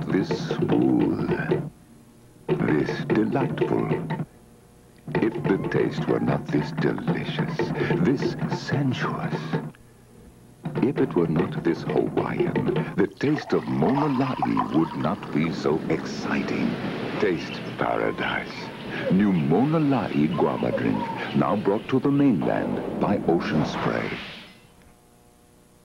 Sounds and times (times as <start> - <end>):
Speech: 0.0 - 1.7, 2.6 - 4.2, 5.1 - 9.6, 10.8 - 24.3.